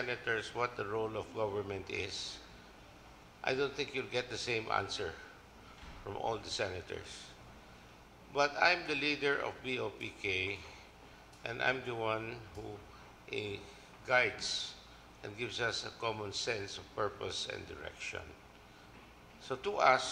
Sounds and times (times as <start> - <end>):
Male speech, man speaking: 0.0 - 2.5, 3.4 - 5.4, 6.0 - 7.4, 8.3 - 10.8, 11.4 - 18.4, 19.4 - 20.1
Narration, monologue: 0.0 - 20.1.